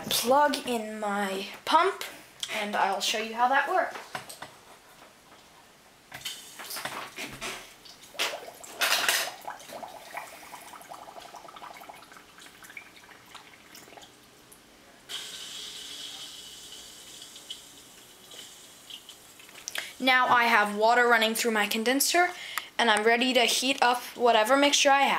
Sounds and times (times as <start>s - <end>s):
Speech: 0.0s - 4.0s, 20.0s - 25.1s
Inside, small room: 0.0s - 25.1s.